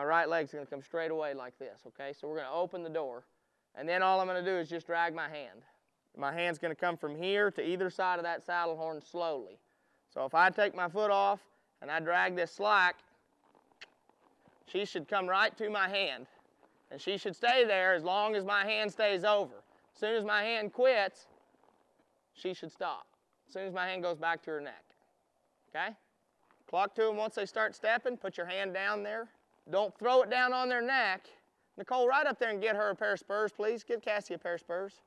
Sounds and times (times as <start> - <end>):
Speech: 0.0 - 9.6, 10.2 - 13.0, 14.7 - 16.3, 16.9 - 21.2, 22.4 - 24.9, 25.8 - 26.0, 26.7 - 35.0.